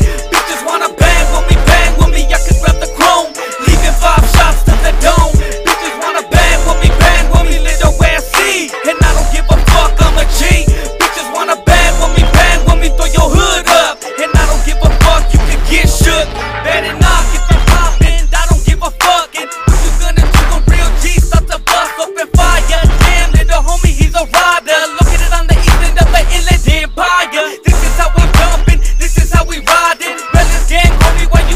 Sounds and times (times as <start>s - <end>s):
Music: 0.0s - 31.5s.